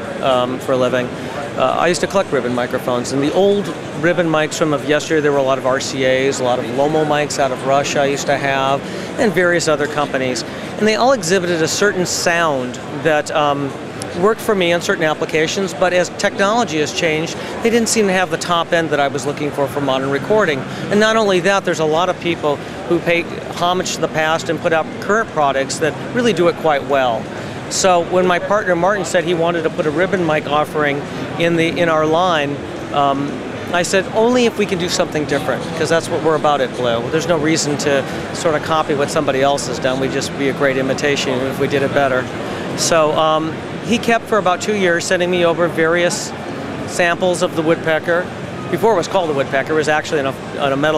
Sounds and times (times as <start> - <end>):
Speech: 0.0 - 50.9.